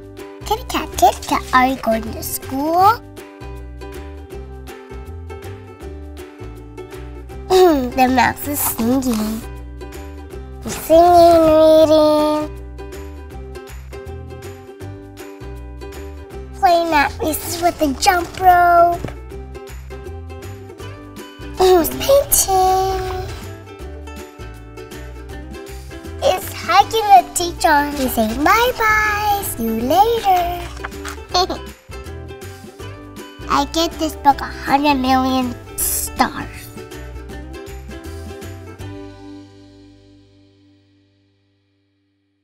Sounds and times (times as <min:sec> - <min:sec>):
Music: 0:00.0 - 0:42.4
Speech: 0:00.5 - 0:03.0, 0:07.5 - 0:09.5, 0:10.7 - 0:12.5, 0:16.6 - 0:19.0, 0:21.6 - 0:23.4, 0:26.2 - 0:31.7, 0:33.5 - 0:36.8.